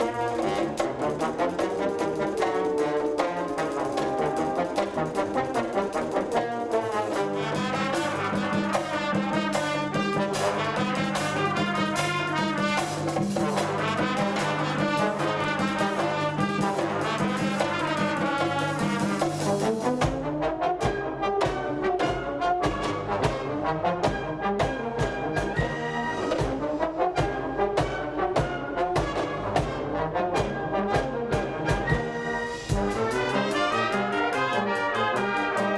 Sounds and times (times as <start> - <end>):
Orchestra: 0.0 - 35.7
Wind instrument, woodwind instrument: 0.0 - 35.7.